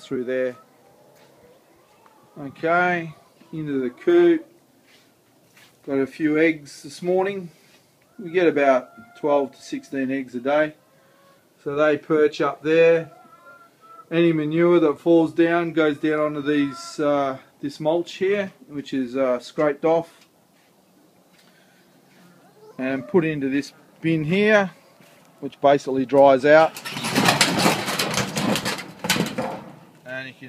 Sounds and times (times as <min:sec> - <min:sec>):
Speech: 0:02.4 - 0:04.5, 0:05.9 - 0:07.5, 0:14.1 - 0:20.2, 0:22.8 - 0:24.8, 0:25.4 - 0:26.7, 0:30.0 - 0:30.4.